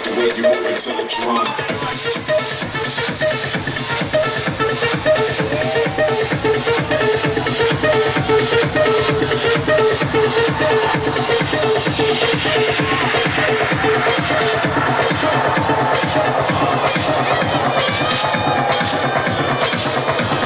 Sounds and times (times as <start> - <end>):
Electronica: 0.0 - 20.4.